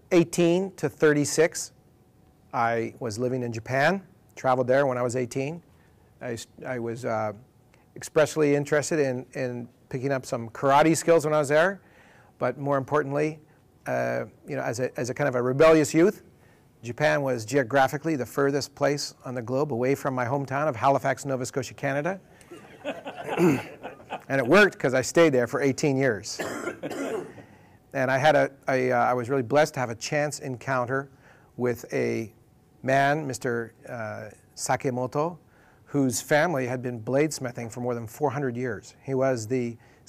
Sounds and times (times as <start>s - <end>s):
Speech: 0.1s - 1.8s, 2.5s - 5.6s, 6.2s - 7.4s, 8.0s - 11.8s, 12.4s - 22.2s, 24.3s - 26.5s, 27.9s - 40.0s.